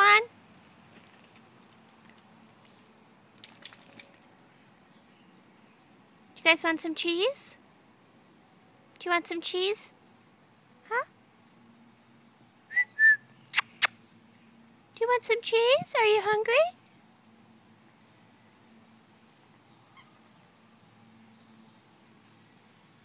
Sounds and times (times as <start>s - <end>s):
Speech: 0.0s - 0.3s, 6.4s - 7.6s, 9.0s - 10.0s, 10.9s - 11.1s, 15.0s - 16.8s.